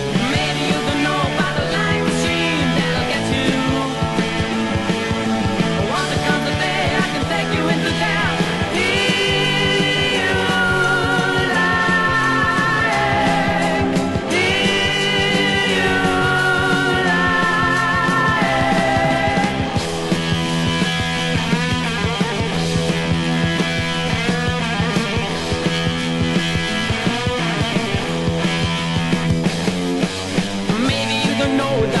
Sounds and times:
Music: 0:00.0 - 0:32.0.

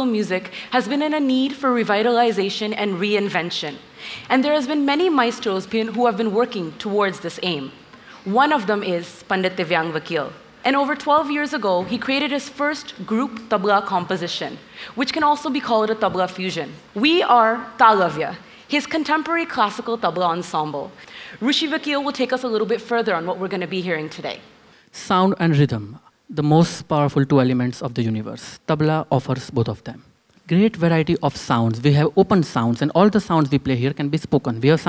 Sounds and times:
Speech: 0:00.0 - 0:24.4, 0:25.0 - 0:34.8.

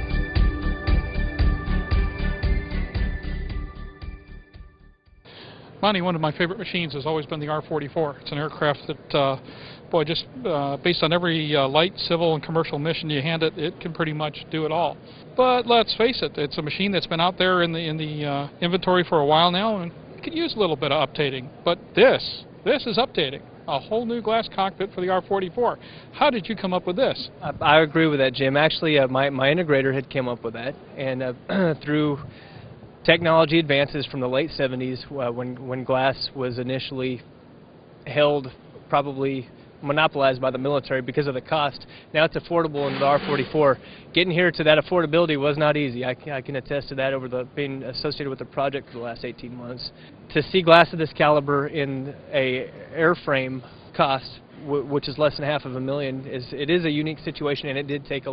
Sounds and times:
Speech: 0:05.8 - 0:32.3, 0:33.0 - 0:37.3, 0:38.0 - 0:58.3.

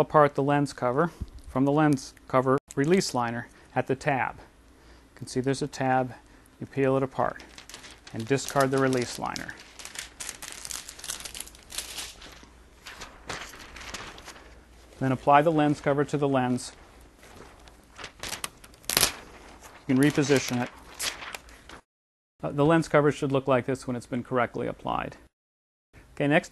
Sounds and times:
Speech: 0:00.0 - 0:04.5, 0:05.2 - 0:07.5, 0:08.1 - 0:09.6, 0:15.0 - 0:16.8, 0:19.9 - 0:20.7, 0:22.4 - 0:25.3, 0:26.2 - 0:26.5
Crumpling, crinkling: 0:07.0 - 0:21.8.

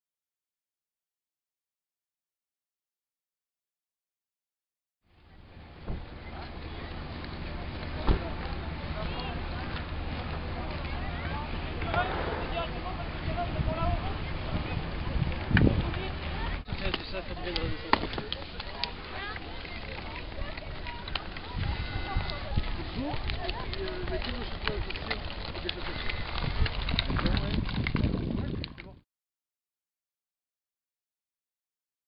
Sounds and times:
Speech: 0:05.2 - 0:29.0.

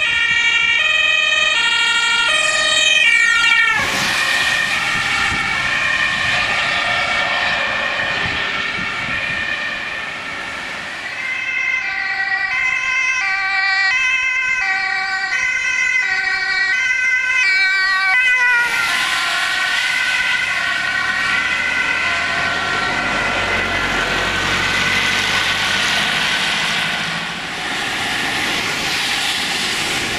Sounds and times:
Ambulance (siren): 0:00.0 - 0:30.1.

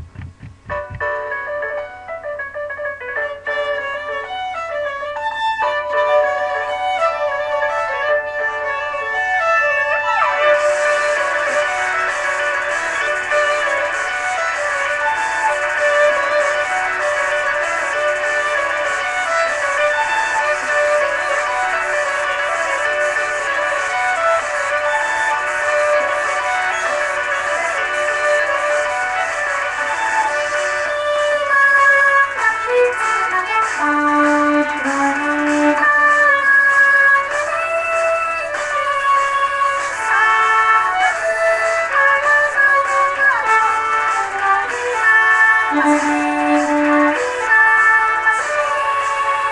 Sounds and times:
Violin, fiddle: 0:03.2 - 0:49.5.

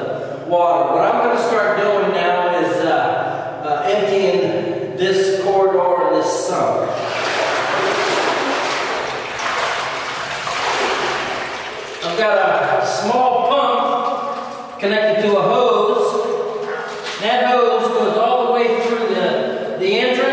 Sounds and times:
Speech: 0:00.0 - 0:07.0, 0:12.0 - 0:14.0, 0:14.8 - 0:16.3, 0:17.2 - 0:20.3.

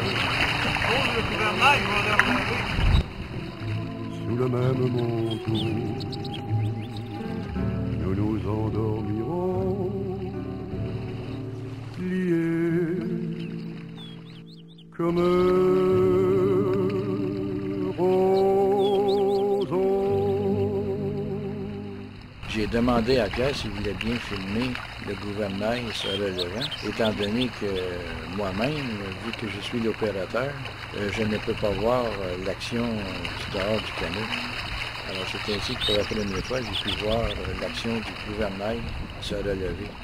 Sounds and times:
Rowboat, canoe, kayak: 0:00.0 - 0:40.0
Speech: 0:22.5 - 0:34.4, 0:35.1 - 0:39.9.

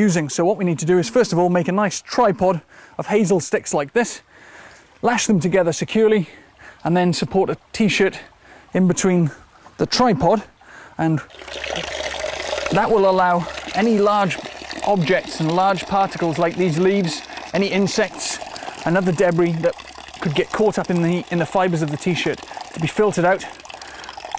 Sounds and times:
Water: 0:00.0 - 0:24.3
Water tap, faucet: 0:11.3 - 0:24.3.

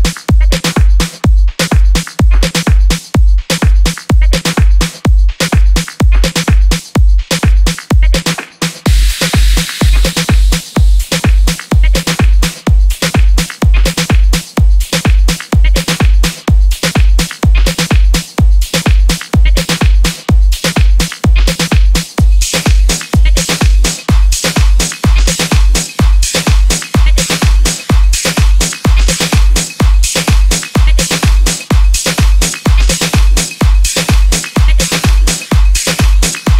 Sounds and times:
Pop music: 0:00.0 - 0:36.5.

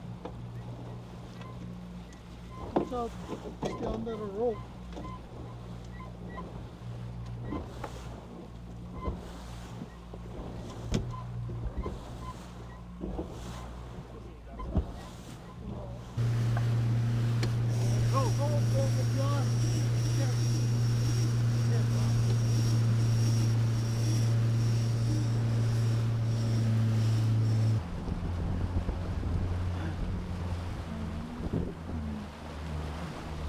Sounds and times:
Outside, rural or natural: 0:00.0 - 0:33.4
Ship: 0:00.0 - 0:33.4.

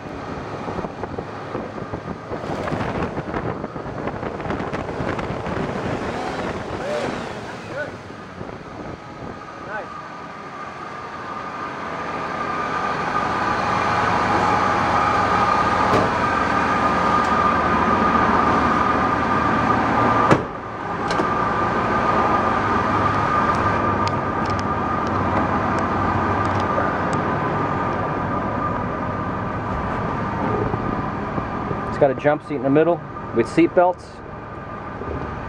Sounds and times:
Door: 0:20.3 - 0:20.5.

